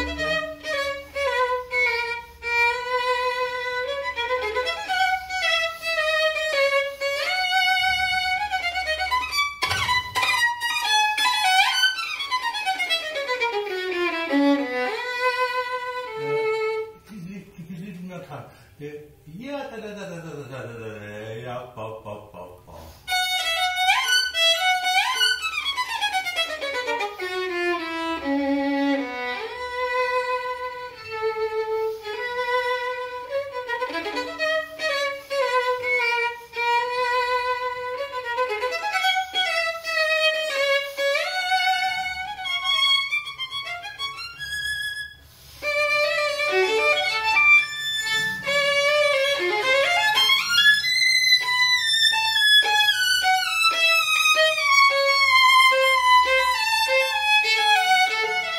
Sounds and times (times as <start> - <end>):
Violin, fiddle: 0.0 - 17.0, 23.1 - 58.5
Speech: 17.1 - 23.0.